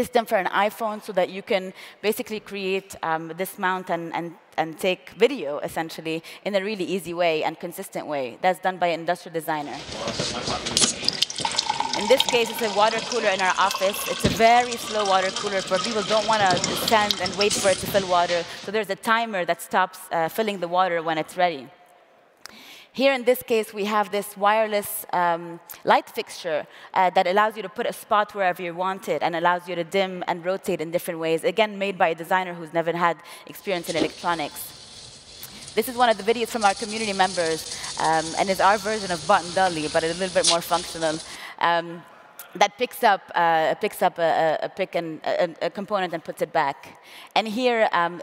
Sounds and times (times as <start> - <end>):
Speech: 0.0 - 10.8, 12.0 - 21.7, 23.0 - 34.6, 35.8 - 48.2.